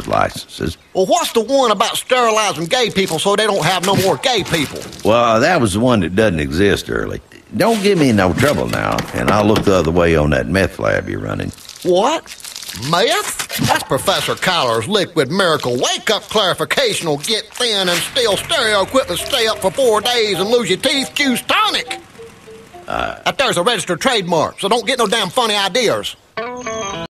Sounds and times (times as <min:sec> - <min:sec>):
Speech: 0:00.0 - 0:21.9, 0:22.9 - 0:26.2
Music: 0:18.6 - 0:23.2, 0:26.4 - 0:27.1.